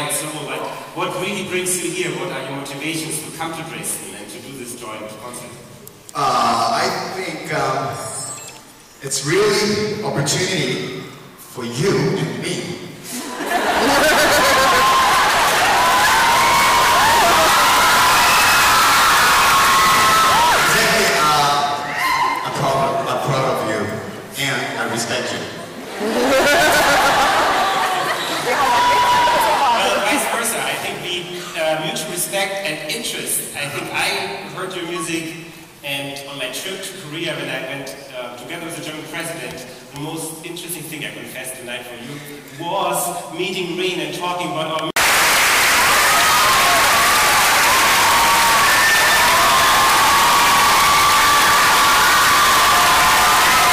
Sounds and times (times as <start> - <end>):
Speech: 0.0 - 8.4, 9.0 - 12.9, 22.4 - 25.6, 29.6 - 45.0.